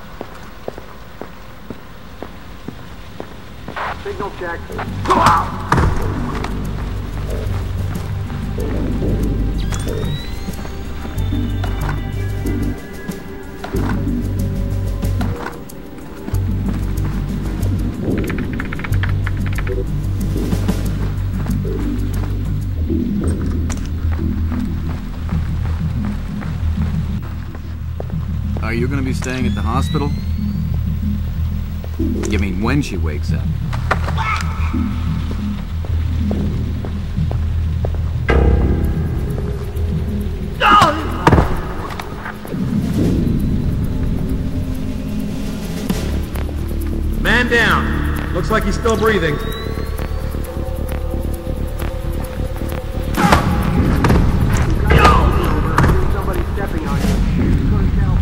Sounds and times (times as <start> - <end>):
Music: 0.0 - 58.2
Speech: 3.9 - 5.6, 28.6 - 30.2, 32.3 - 33.5, 47.2 - 49.6, 54.8 - 58.2.